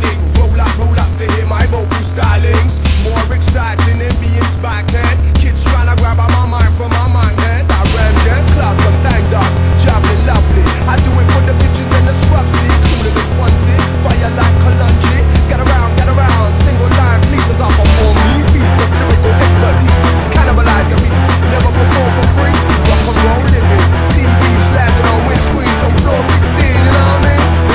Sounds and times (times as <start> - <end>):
Sound effect: 7.7 - 27.7.